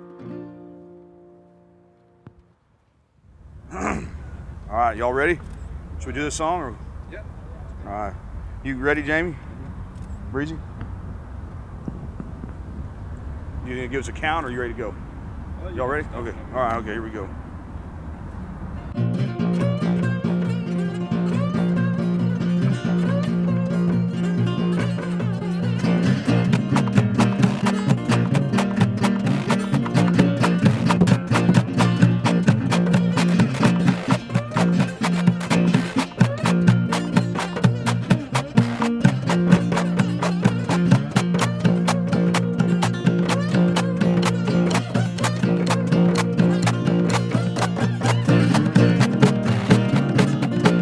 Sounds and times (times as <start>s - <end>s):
Speech: 4.7s - 5.4s, 6.0s - 9.4s, 13.7s - 15.0s, 15.6s - 17.3s.